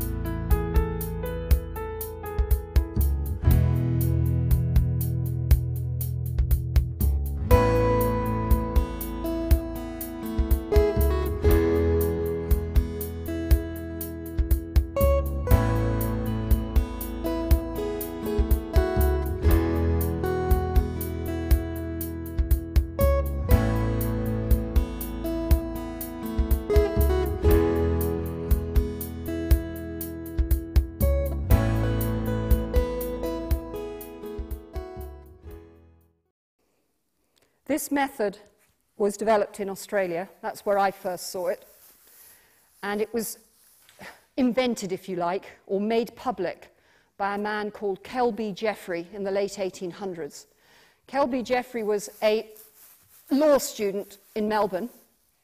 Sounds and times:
Music: 0.0 - 36.3.

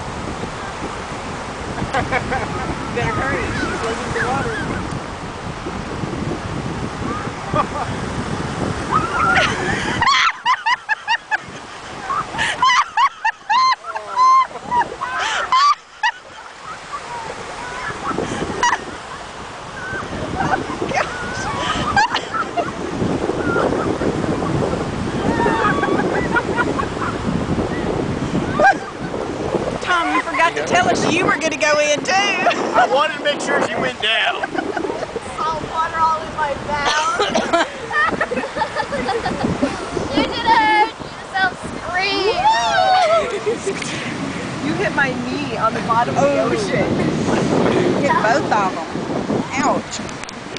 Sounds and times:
Ocean: 0.0 - 50.5
Outside, rural or natural: 0.0 - 50.5.

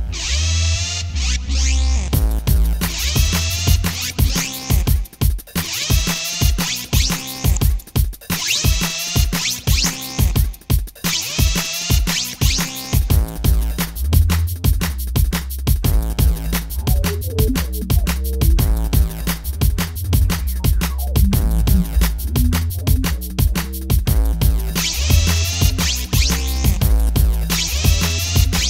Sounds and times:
Sampler: 16.3 - 28.7.

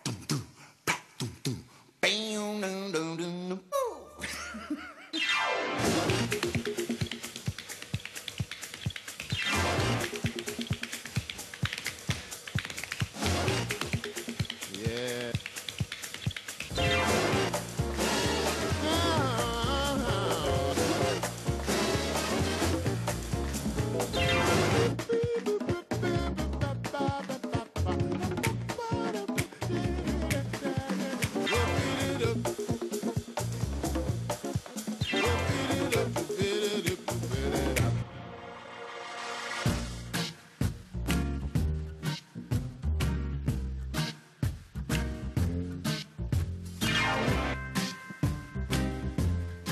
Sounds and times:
Exciting music: 5.2 - 7.7, 9.3 - 11.2, 13.2 - 15.3, 16.7 - 25.1, 31.4 - 34.4, 35.0 - 40.2, 46.8 - 49.7.

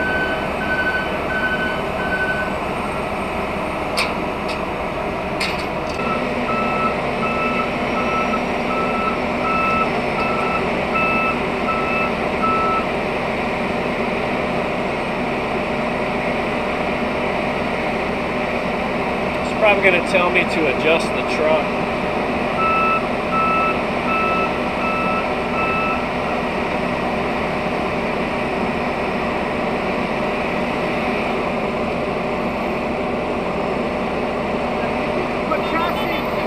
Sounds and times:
Outside, urban or manmade: 0.0 - 36.4
Truck: 0.0 - 36.4
Speech: 19.4 - 21.7, 35.5 - 36.4.

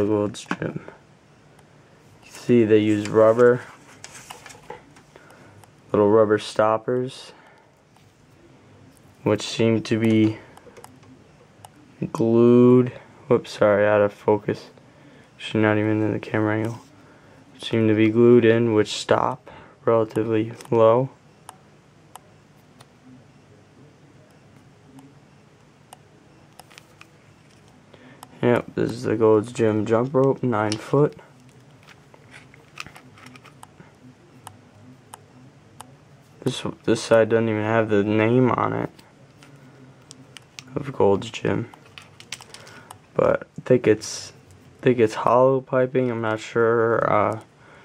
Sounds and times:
Speech: 0.0 - 1.0, 2.3 - 3.7, 5.9 - 7.4, 9.2 - 10.5, 11.8 - 14.8, 15.4 - 21.2, 28.3 - 31.6, 32.9 - 41.8, 43.2 - 47.5
Inside, small room: 0.0 - 47.8.

